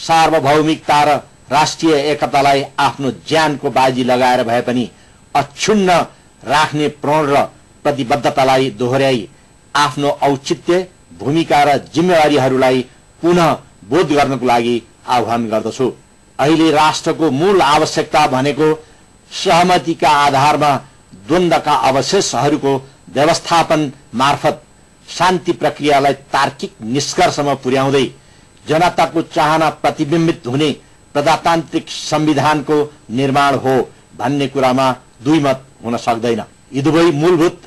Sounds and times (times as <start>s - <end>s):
Male speech, man speaking: 0.0s - 37.6s
Narration, monologue: 0.0s - 37.6s.